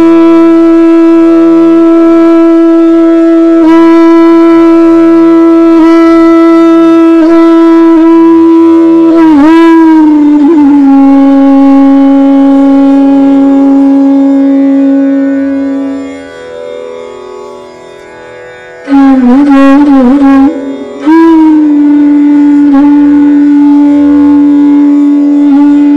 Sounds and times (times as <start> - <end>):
Bowed string instrument: 0.0 - 25.9.